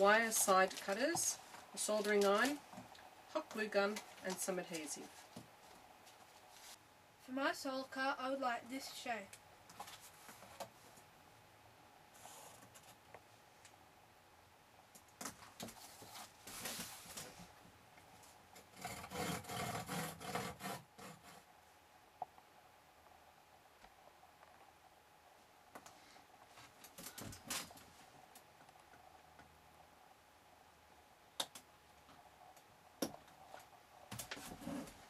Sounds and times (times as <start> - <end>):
Speech: 0.0 - 2.6, 3.3 - 5.1, 7.3 - 9.4.